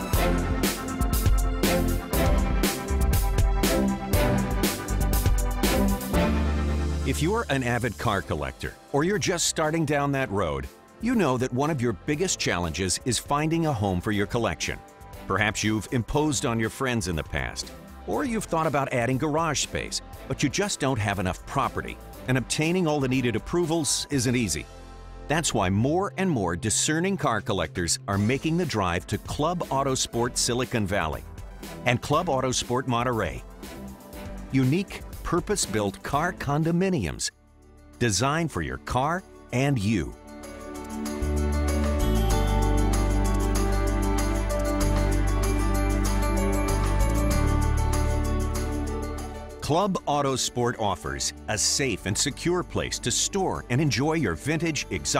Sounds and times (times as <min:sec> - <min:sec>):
Music: 0:00.0 - 0:55.1
Speech: 0:07.1 - 0:24.7, 0:25.3 - 0:31.2, 0:31.8 - 0:33.4, 0:34.5 - 0:37.3, 0:38.0 - 0:40.2, 0:49.6 - 0:55.1.